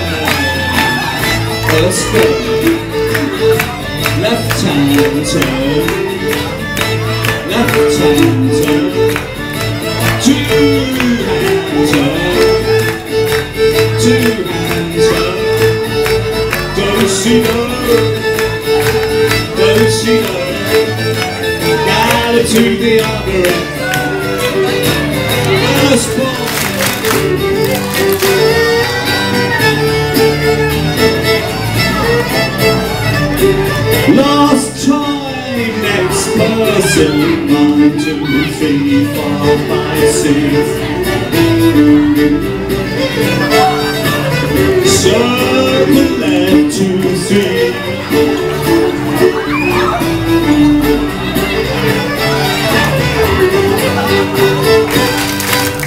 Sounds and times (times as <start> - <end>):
Music: 0.0 - 55.8.